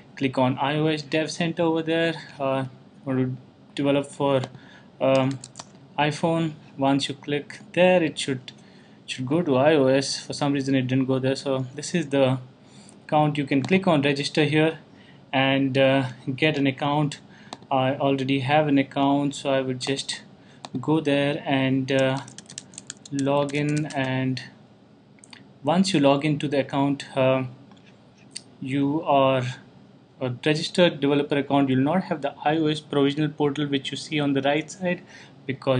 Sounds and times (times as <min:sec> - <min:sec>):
Speech: 0:00.2 - 0:12.5, 0:13.1 - 0:22.4, 0:23.1 - 0:24.6, 0:25.6 - 0:27.6, 0:28.4 - 0:35.7.